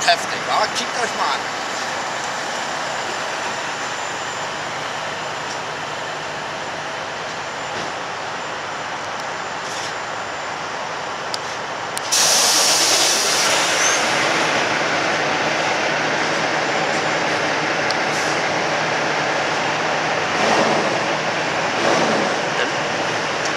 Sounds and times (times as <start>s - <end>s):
Truck: 0.0s - 23.5s.